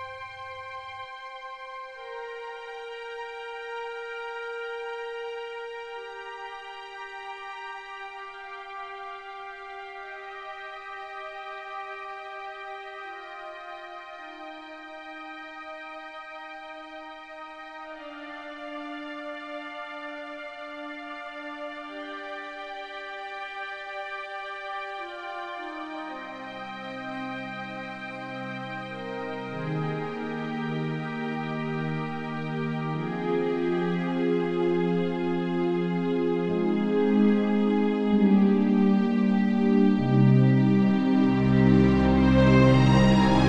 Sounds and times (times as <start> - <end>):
Music: 0.0 - 43.4.